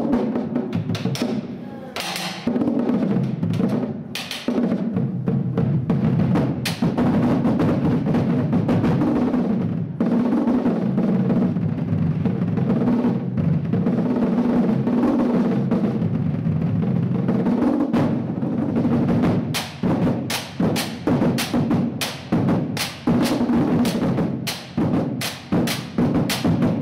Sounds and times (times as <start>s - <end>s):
Drum roll: 0.0s - 26.8s.